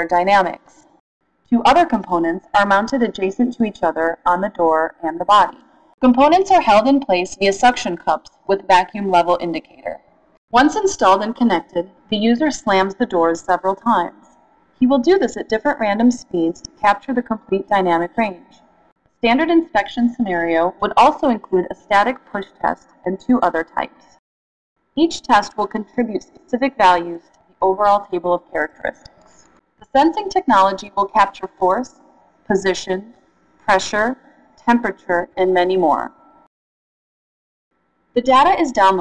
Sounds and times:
Speech: 0:00.0 - 0:00.8, 0:01.5 - 0:10.0, 0:10.6 - 0:14.2, 0:14.8 - 0:18.5, 0:19.2 - 0:24.1, 0:25.0 - 0:29.1, 0:29.8 - 0:33.1, 0:33.7 - 0:36.1, 0:38.2 - 0:39.0.

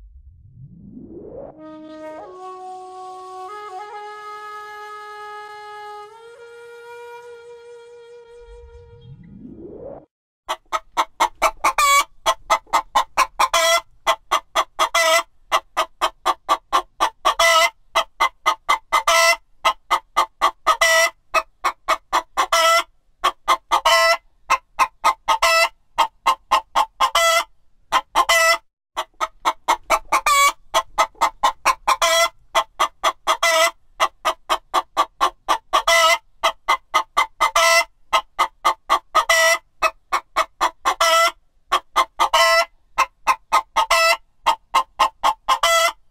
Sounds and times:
Cluck: 0:10.5 - 0:46.0.

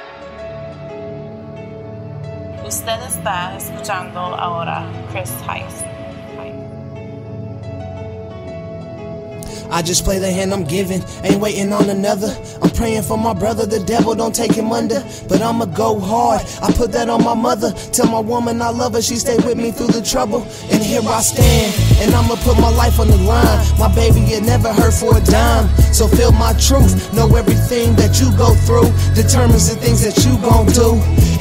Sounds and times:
Rhythm and blues: 0:09.4 - 0:31.4.

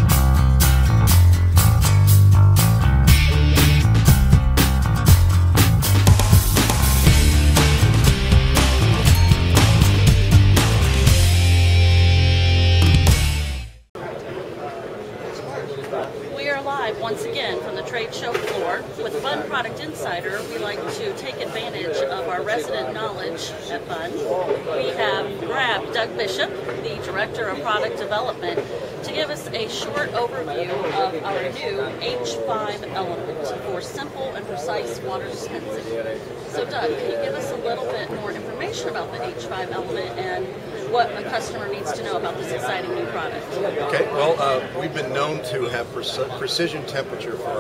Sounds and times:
Speech: 0:14.0 - 0:47.6.

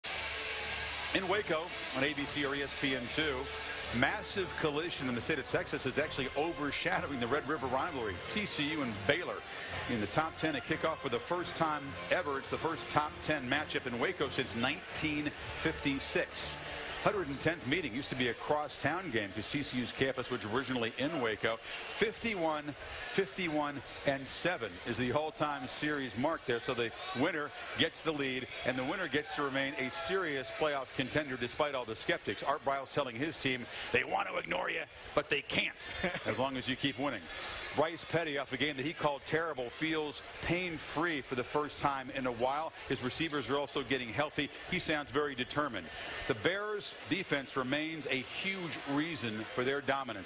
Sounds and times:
Music: 0:00.0 - 0:50.2
Speech: 0:01.1 - 0:50.2.

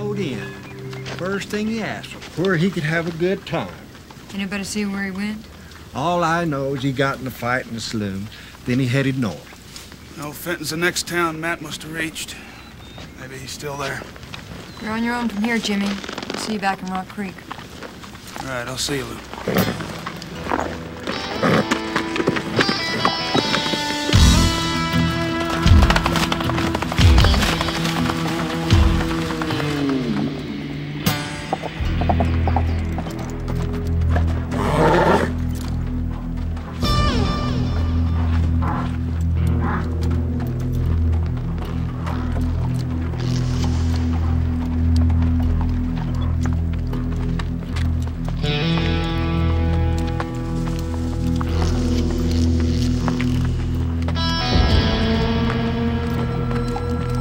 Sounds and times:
Music: 0:00.0 - 0:03.4, 0:19.9 - 0:57.2
Outside, rural or natural: 0:00.0 - 0:57.2.

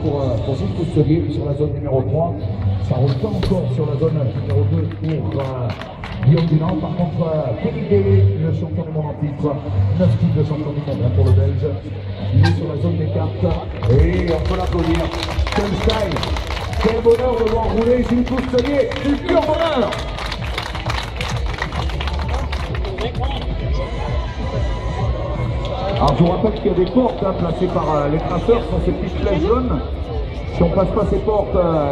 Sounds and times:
Speech: 0:00.0 - 0:20.0, 0:25.8 - 0:29.9
Music: 0:00.0 - 0:31.9.

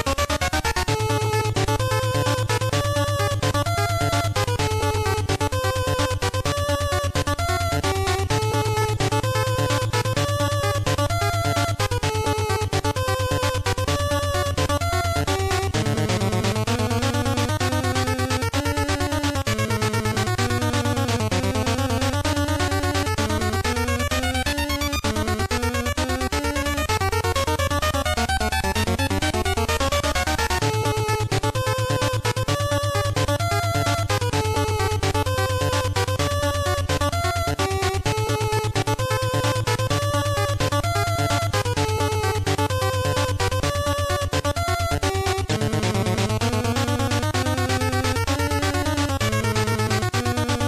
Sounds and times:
Music: 0:00.0 - 0:50.6.

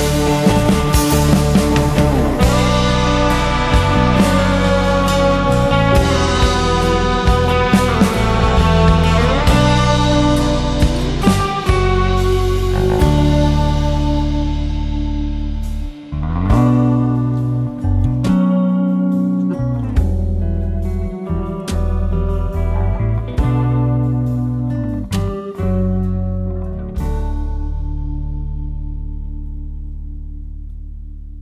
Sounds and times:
Music: 0:00.0 - 0:31.4.

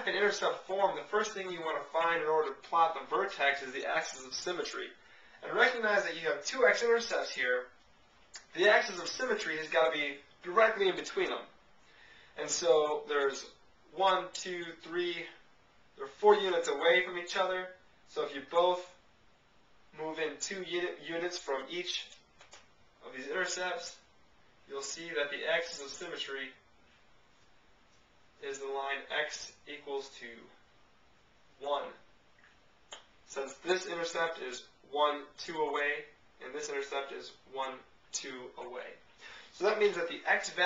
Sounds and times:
Speech: 0:00.0 - 0:07.8, 0:08.4 - 0:11.5, 0:12.4 - 0:15.4, 0:16.0 - 0:19.0, 0:19.9 - 0:22.2, 0:23.0 - 0:24.1, 0:24.7 - 0:26.6, 0:28.4 - 0:30.6, 0:31.6 - 0:32.1, 0:33.3 - 0:40.6.

